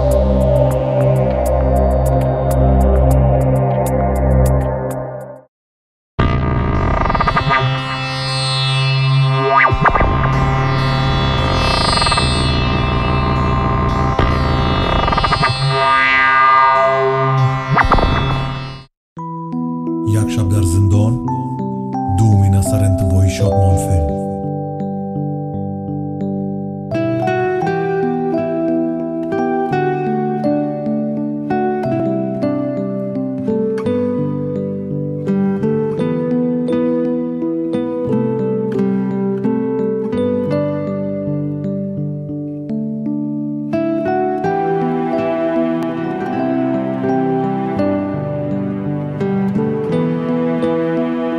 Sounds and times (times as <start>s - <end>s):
Music: 0.0s - 5.5s, 6.2s - 51.3s
Speech: 20.0s - 21.4s, 22.1s - 24.4s.